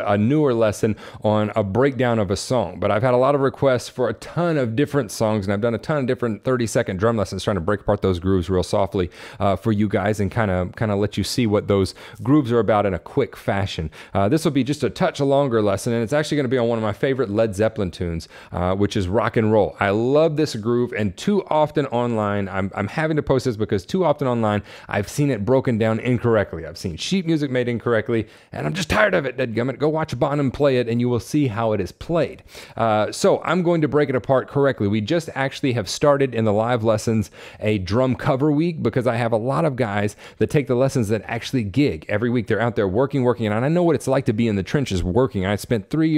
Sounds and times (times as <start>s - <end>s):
Speech: 0.0s - 46.1s.